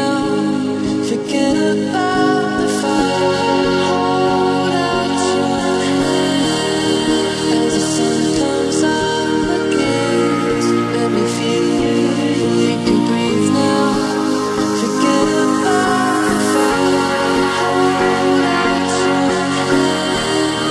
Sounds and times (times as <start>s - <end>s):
Electronic music: 0.0s - 20.7s.